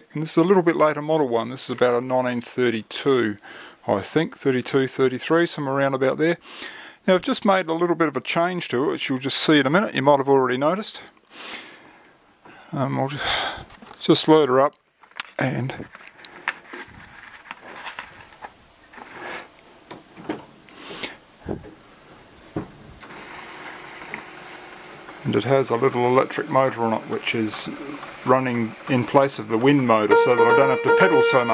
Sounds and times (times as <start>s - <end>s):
Speech: 0.0s - 6.4s, 7.0s - 11.1s, 12.7s - 15.9s, 25.2s - 31.5s.